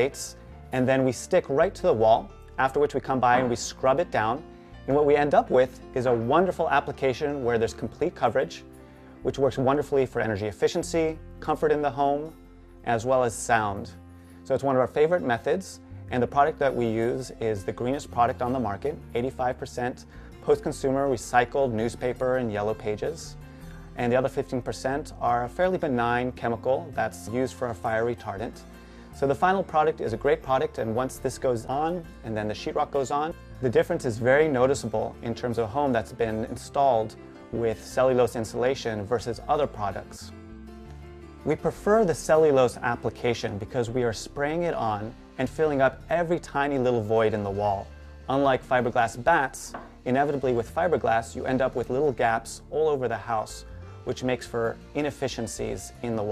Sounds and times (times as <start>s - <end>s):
Speech: 0.0s - 8.6s, 9.2s - 12.3s, 12.9s - 23.4s, 24.0s - 28.6s, 29.2s - 40.4s, 41.4s - 56.3s
Music: 0.0s - 56.3s.